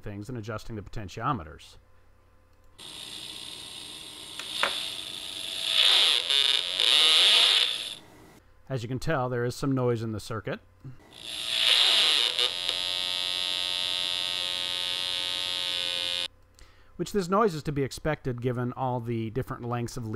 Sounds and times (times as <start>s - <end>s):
Speech: 0.0s - 1.8s, 8.7s - 10.6s, 17.0s - 20.1s
Electric shaver, electric razor: 2.8s - 8.2s, 11.0s - 16.3s.